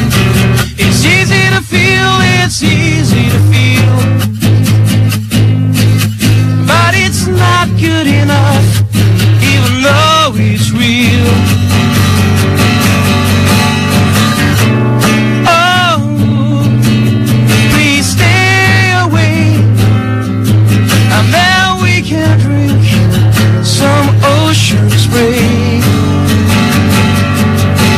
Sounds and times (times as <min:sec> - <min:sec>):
Music: 0:00.0 - 0:27.9.